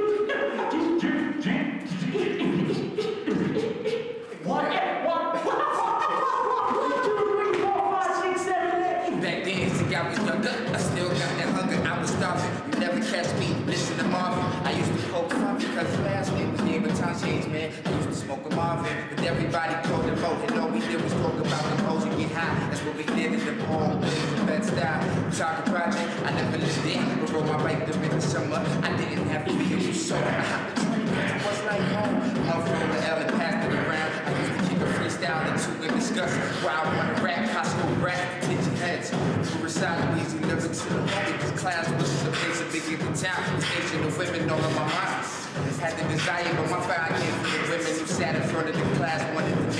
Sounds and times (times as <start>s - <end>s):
Music: 0.0s - 4.3s, 7.1s - 49.7s
Male singing: 6.6s - 49.7s.